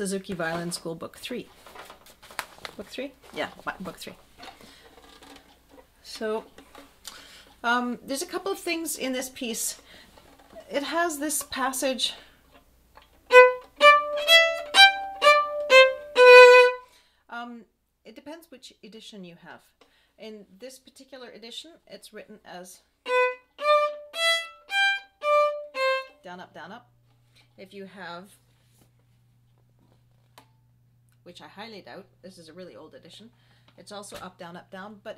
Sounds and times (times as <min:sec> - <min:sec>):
Speech: 0:00.0 - 0:01.5, 0:02.8 - 0:04.2, 0:06.0 - 0:06.5, 0:07.6 - 0:09.9, 0:10.6 - 0:12.3, 0:17.3 - 0:22.9, 0:26.2 - 0:26.9, 0:27.6 - 0:28.4, 0:31.2 - 0:35.1
Violin, fiddle: 0:13.3 - 0:16.8, 0:23.1 - 0:26.2.